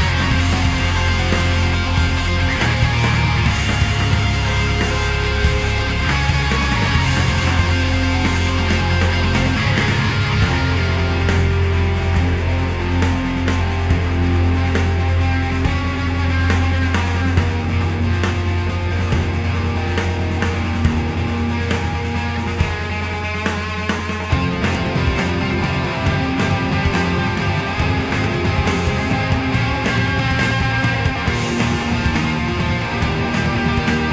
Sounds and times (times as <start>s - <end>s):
Progressive rock: 0.0s - 34.1s.